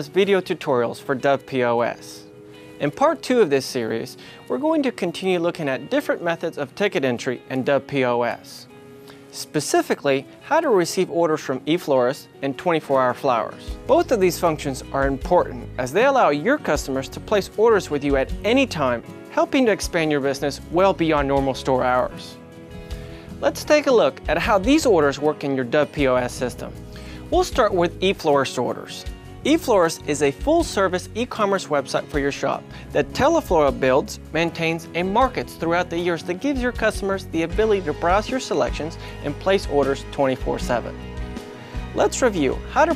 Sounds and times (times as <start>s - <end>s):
Speech: 0.0s - 8.7s, 9.3s - 22.4s, 23.4s - 41.0s, 42.0s - 42.9s
Music: 0.0s - 42.9s.